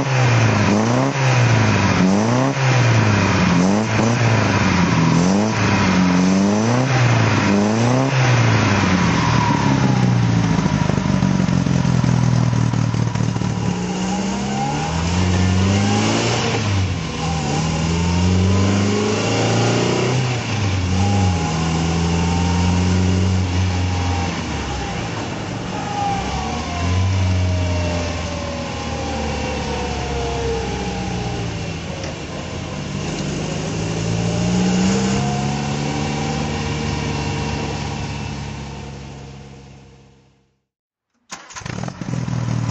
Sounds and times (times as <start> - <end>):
Car: 0.0 - 42.7.